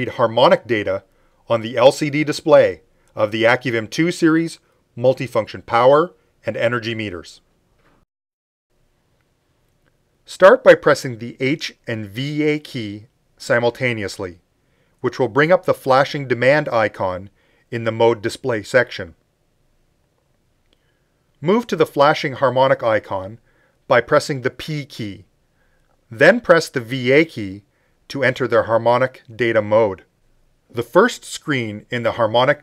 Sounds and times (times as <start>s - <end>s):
Speech: 0.0s - 7.4s, 10.3s - 14.4s, 15.0s - 19.2s, 21.4s - 25.3s, 26.1s - 30.1s, 30.7s - 32.6s.